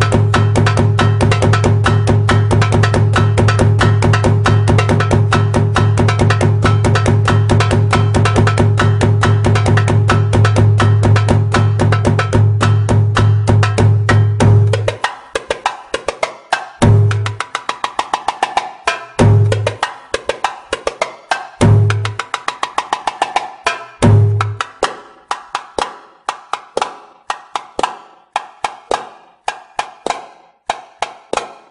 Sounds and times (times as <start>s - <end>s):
Inside, small room: 0.0s - 31.7s
Wood block: 0.0s - 31.7s.